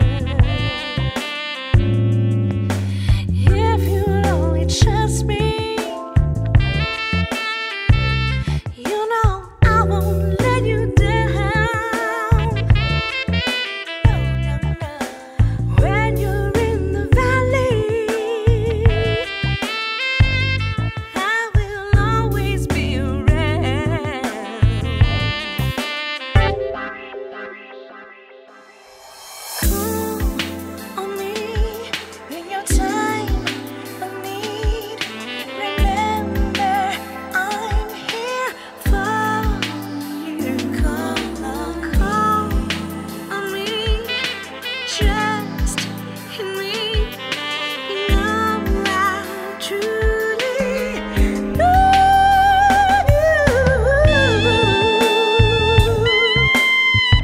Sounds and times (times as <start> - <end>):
Music: 0.0 - 57.2.